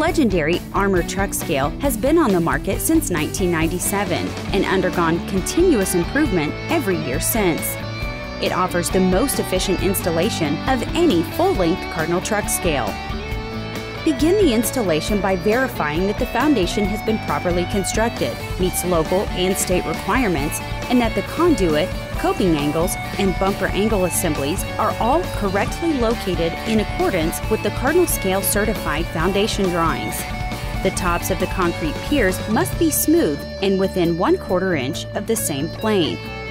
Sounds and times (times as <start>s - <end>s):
Speech: 0.0s - 7.8s, 8.4s - 13.0s, 14.1s - 30.2s, 30.8s - 36.2s
Music: 0.0s - 36.5s.